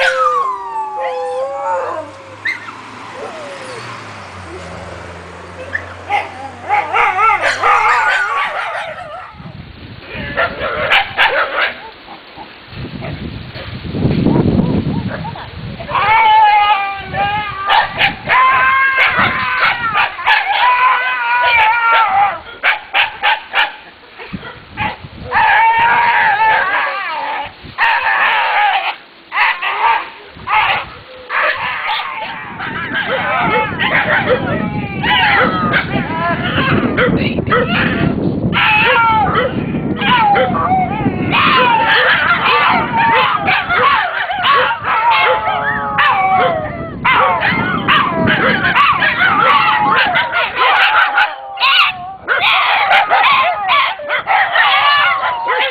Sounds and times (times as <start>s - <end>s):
Whimper (dog): 0.0s - 4.8s, 5.6s - 9.4s, 15.2s - 22.6s, 25.3s - 28.8s, 29.4s - 55.7s
Yip: 5.7s - 9.4s, 10.4s - 11.9s, 17.7s - 26.9s, 27.8s - 55.7s.